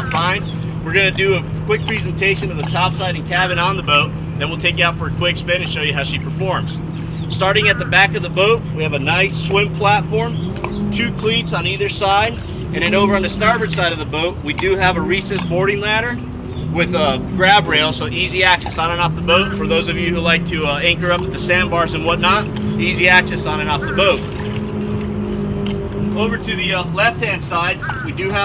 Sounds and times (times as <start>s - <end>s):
Motorboat, speedboat: 0.0s - 28.4s
Speech: 16.8s - 24.2s, 26.2s - 28.4s.